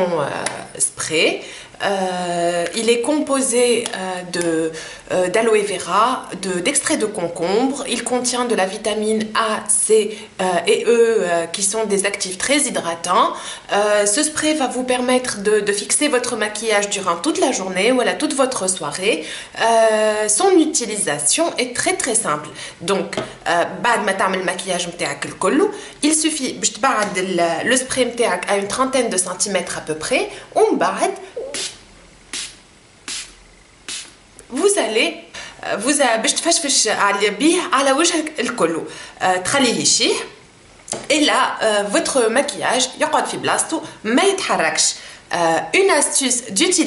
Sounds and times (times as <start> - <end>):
Speech: 0.0 - 31.7, 34.5 - 40.4, 41.0 - 46.8.